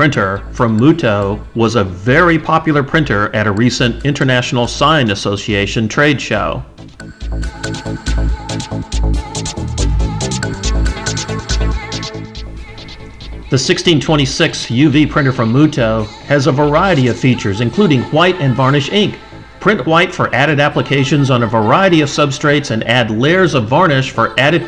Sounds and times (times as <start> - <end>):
Speech: 0.0 - 6.7, 13.5 - 24.6
Music: 0.0 - 24.6.